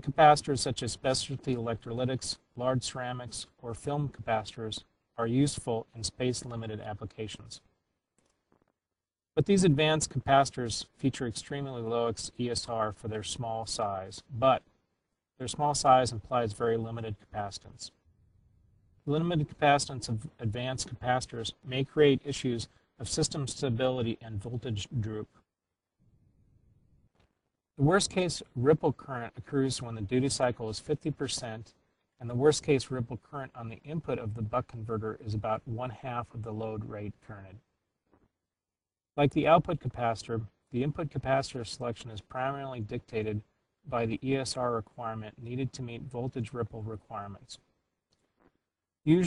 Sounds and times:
Speech: 0.0s - 7.7s, 9.4s - 14.7s, 15.4s - 18.0s, 19.0s - 25.4s, 27.8s - 37.7s, 39.2s - 47.7s, 49.0s - 49.2s.

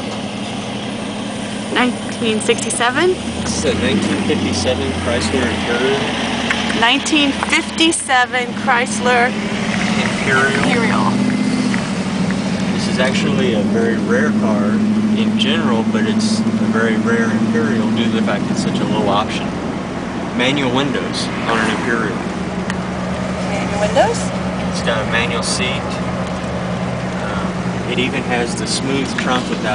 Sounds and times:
Car: 0.0s - 29.7s
Outside, urban or manmade: 0.0s - 29.7s
Speech: 1.8s - 6.1s, 10.0s - 11.2s, 12.8s - 19.5s, 20.4s - 22.2s, 23.5s - 26.0s, 27.3s - 29.7s.

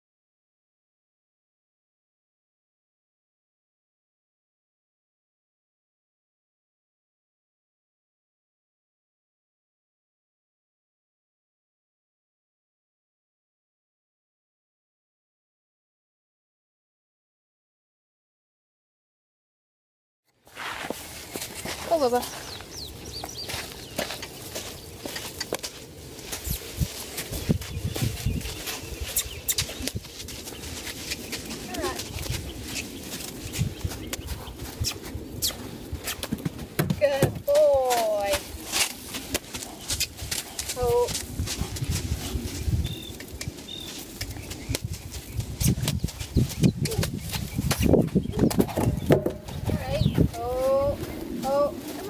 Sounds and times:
Outside, rural or natural: 20.3s - 52.0s
Speech: 21.8s - 22.3s, 31.7s - 32.1s, 37.0s - 38.4s, 40.8s - 41.2s, 49.7s - 52.0s.

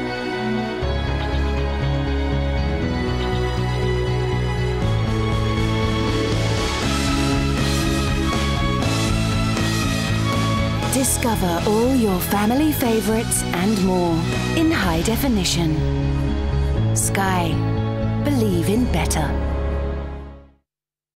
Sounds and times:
Music: 0.0s - 20.7s
Speech: 10.9s - 15.8s, 17.0s - 17.6s, 18.2s - 19.4s.

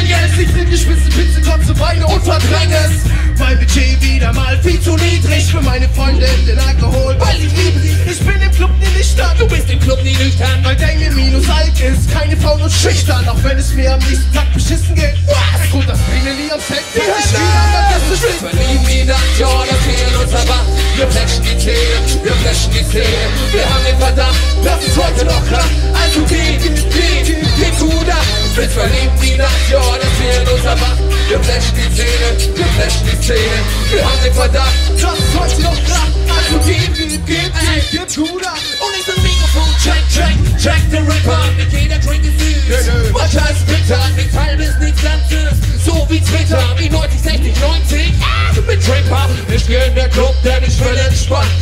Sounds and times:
Music: 0.0s - 51.6s.

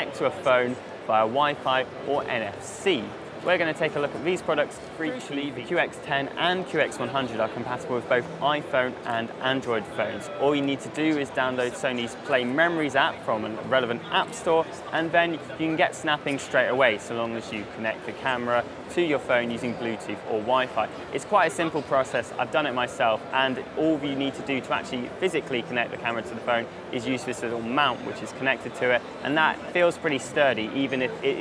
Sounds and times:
Speech: 0.0s - 31.4s.

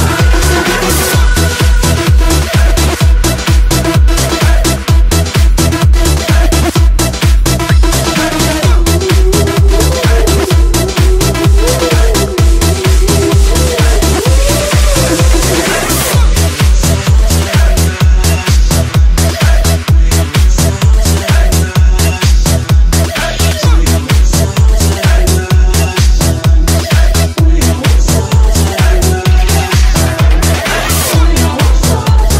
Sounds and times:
Dance music: 0.0s - 32.3s
Electronic dance music: 0.0s - 32.3s.

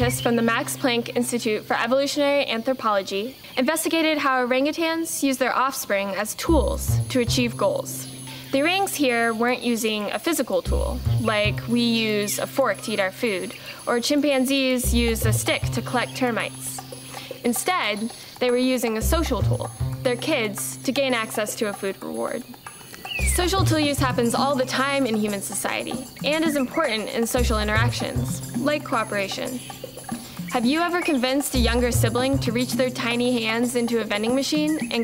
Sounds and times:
Music: 0.0s - 2.1s, 6.4s - 35.0s
Speech: 0.0s - 16.8s, 17.4s - 22.5s, 23.2s - 29.6s, 30.5s - 35.0s.

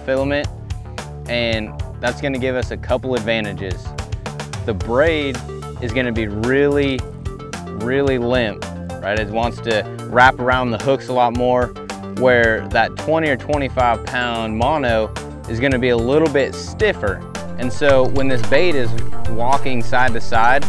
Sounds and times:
Speech: 0.0s - 0.5s, 1.3s - 3.9s, 4.7s - 7.0s, 7.8s - 20.6s
Music: 0.0s - 20.6s.

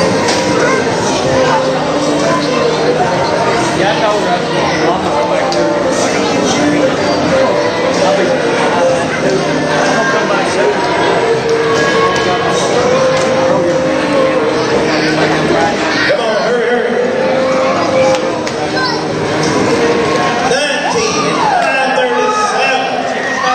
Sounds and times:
Speech: 0.0s - 19.0s, 20.4s - 23.5s
Inside, public space: 0.0s - 23.5s
Music: 0.0s - 23.5s.

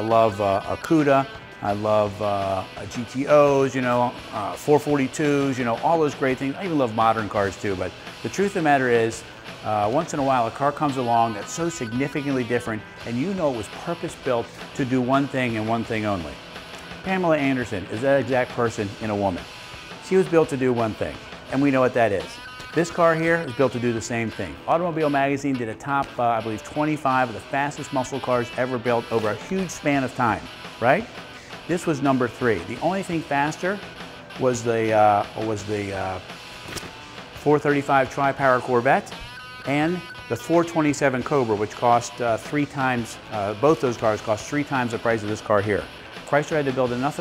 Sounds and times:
Speech: 0.0s - 16.4s, 17.1s - 19.4s, 20.0s - 31.1s, 31.7s - 33.8s, 34.4s - 36.2s, 37.4s - 39.1s, 39.7s - 47.2s
Music: 0.0s - 47.2s.

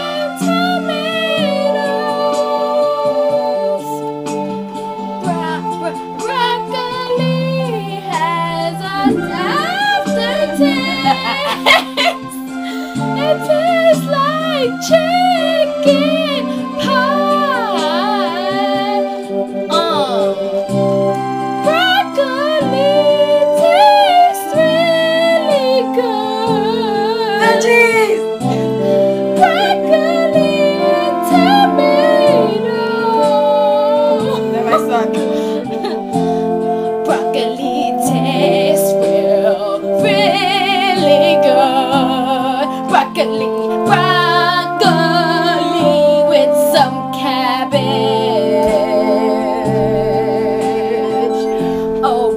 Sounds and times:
Music: 0.0s - 52.3s.

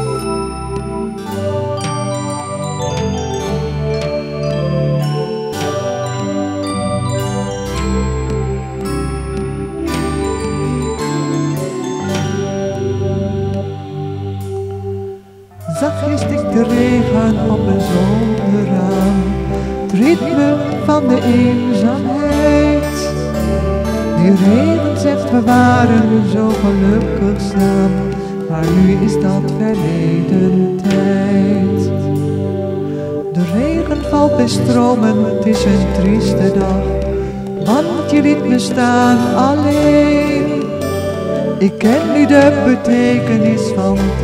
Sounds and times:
Music: 0.0s - 44.2s.

